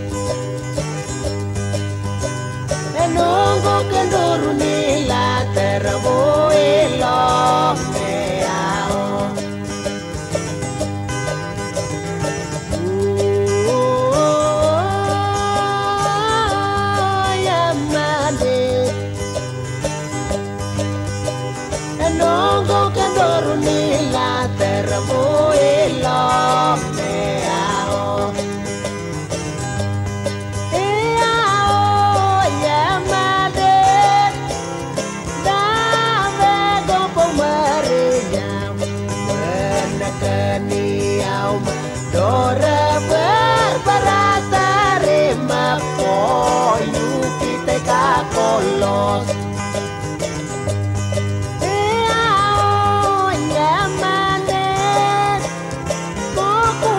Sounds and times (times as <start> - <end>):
Music: 0.0 - 56.9.